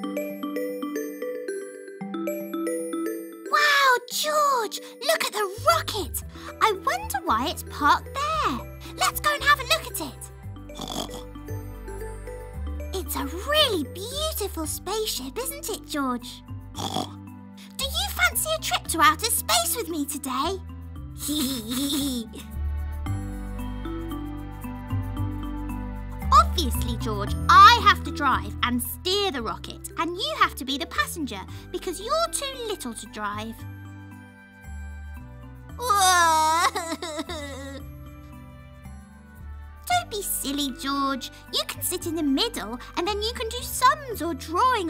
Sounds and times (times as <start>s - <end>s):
Music: 0.0s - 44.9s
Speech: 3.5s - 10.3s, 13.0s - 16.4s, 17.6s - 20.6s, 21.2s - 22.5s, 26.3s - 33.6s, 35.8s - 37.8s, 39.9s - 44.9s.